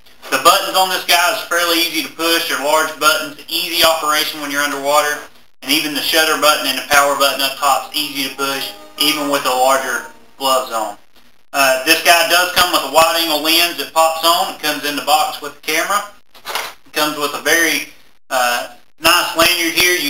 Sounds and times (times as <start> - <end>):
Speech: 0.3 - 11.0, 11.6 - 16.2, 16.9 - 20.0.